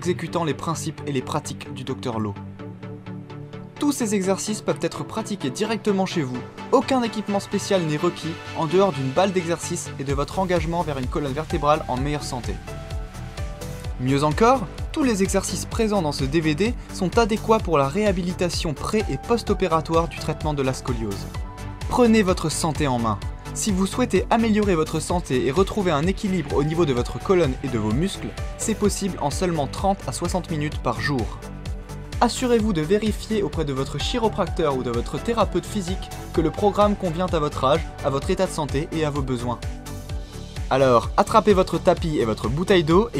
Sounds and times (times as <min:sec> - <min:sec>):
Speech: 0:00.0 - 0:02.4, 0:03.8 - 0:12.6, 0:14.0 - 0:21.3, 0:21.9 - 0:31.4, 0:32.2 - 0:39.6, 0:40.7 - 0:43.1
Music: 0:00.0 - 0:43.1.